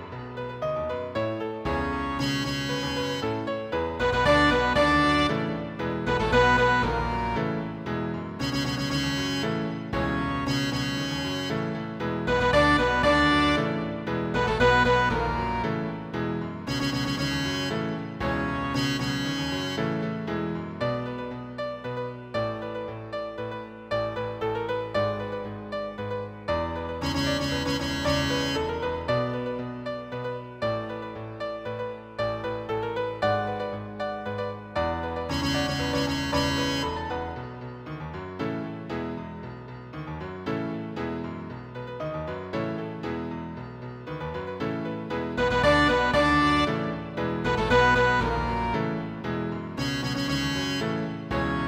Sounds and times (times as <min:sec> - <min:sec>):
Theme music: 0:01.7 - 0:20.2, 0:34.3 - 0:37.9, 0:44.9 - 0:51.6.